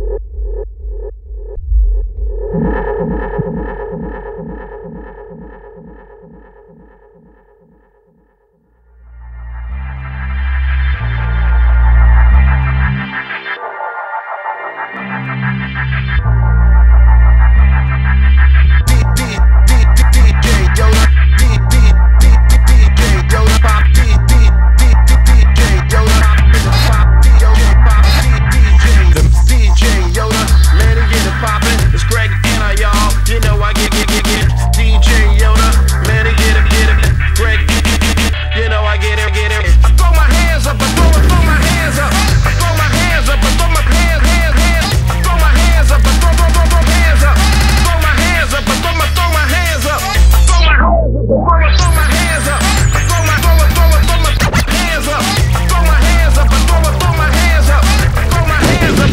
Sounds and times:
Music: 1.4s - 59.1s.

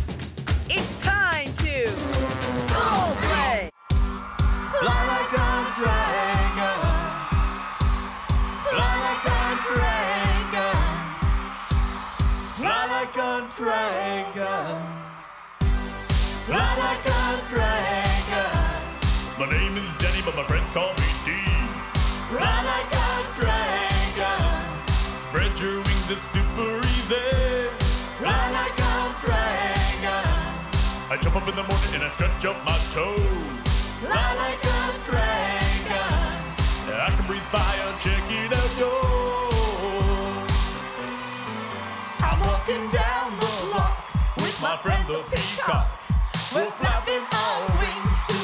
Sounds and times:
Music: 0.0s - 48.4s.

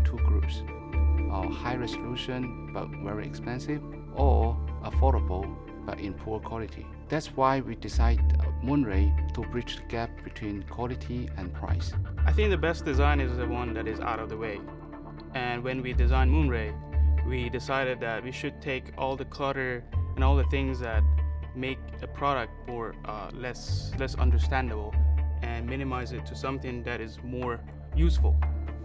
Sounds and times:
Speech: 0.0s - 0.6s, 1.3s - 14.7s, 15.3s - 28.4s
Music: 0.0s - 28.8s.

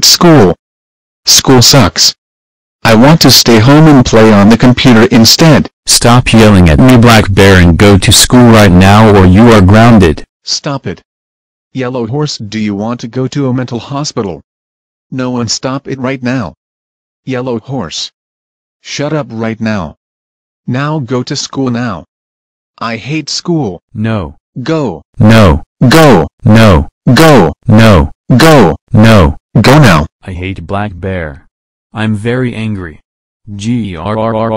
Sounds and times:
Speech: 0.0s - 0.6s, 1.3s - 2.2s, 2.8s - 11.0s, 11.8s - 14.4s, 15.1s - 16.6s, 17.3s - 18.2s, 18.8s - 20.0s, 20.7s - 22.1s, 22.8s - 34.5s.

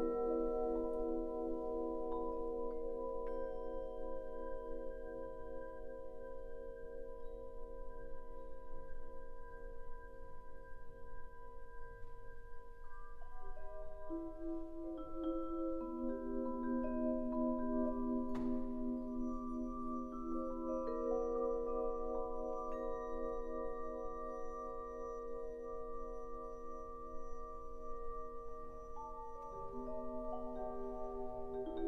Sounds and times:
Marimba, xylophone: 0.0s - 31.8s
Classical music: 13.7s - 31.8s.

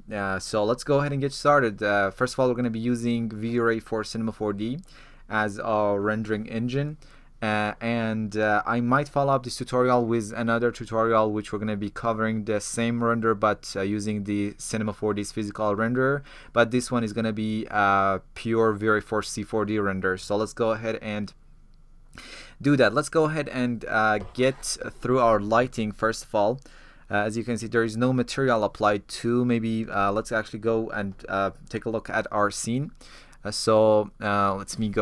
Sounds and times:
Speech: 0.0s - 21.4s, 22.6s - 35.0s.

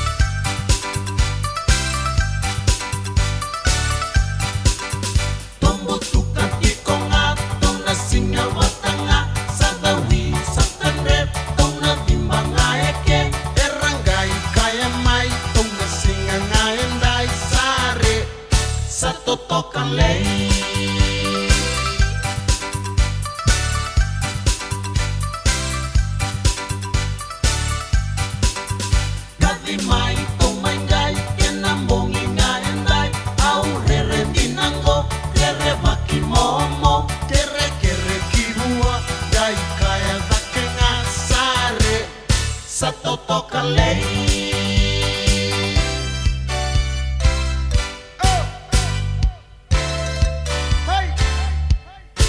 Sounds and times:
Music: 0.0s - 52.2s.

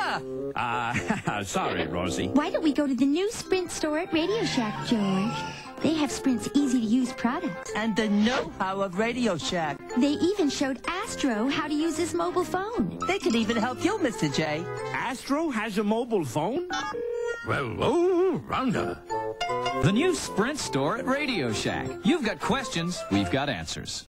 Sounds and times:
Music: 0.0s - 24.1s
Speech: 19.8s - 24.1s.

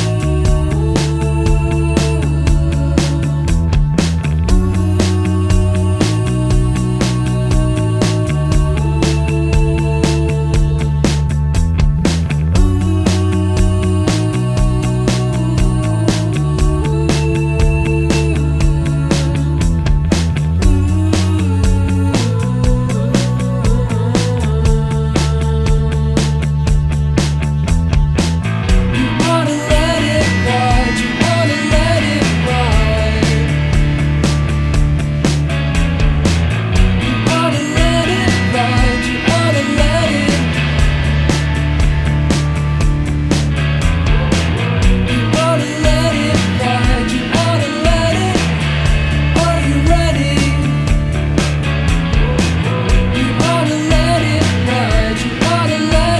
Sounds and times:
Music: 0.0s - 56.1s.

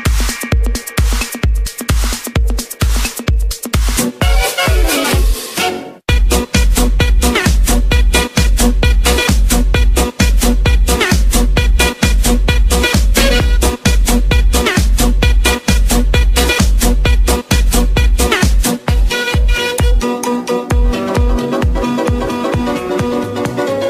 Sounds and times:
Funk: 6.1s - 23.8s.

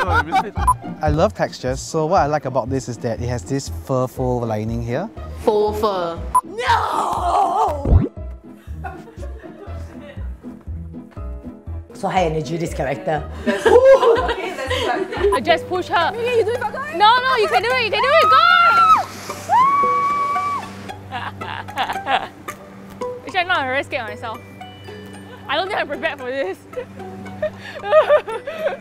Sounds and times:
Music: 0.0s - 28.8s.

